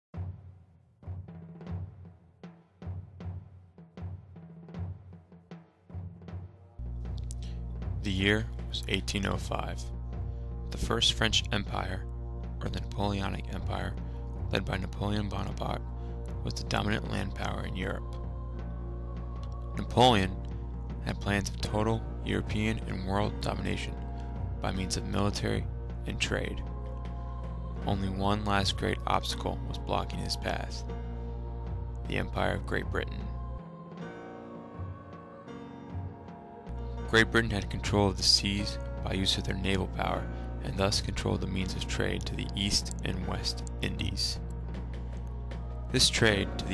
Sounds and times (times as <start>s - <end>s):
Speech: 8.0s - 9.9s, 10.7s - 12.0s, 12.6s - 15.8s, 16.4s - 18.1s, 19.8s - 20.4s, 21.0s - 24.0s, 24.6s - 26.6s, 27.8s - 30.9s, 32.1s - 33.3s, 37.1s - 44.4s, 45.9s - 46.7s.